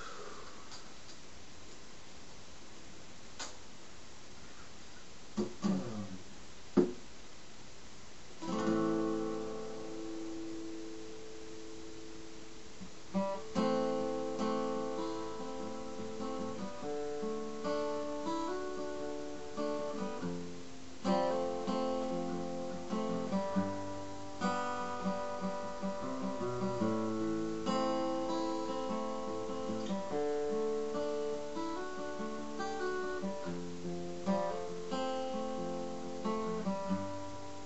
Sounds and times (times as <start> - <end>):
Music: 8.4 - 12.5, 13.1 - 37.6.